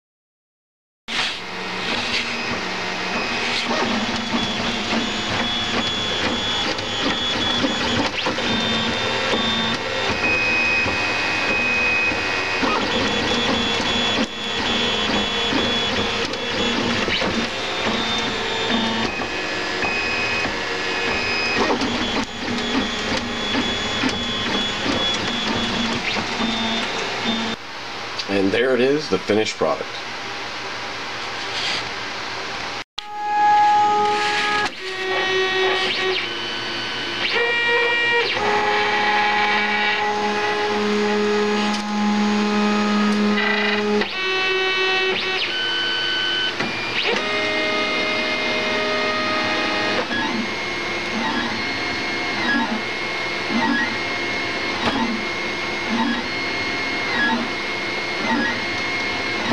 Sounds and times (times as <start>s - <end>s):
Printer: 1.1s - 59.5s.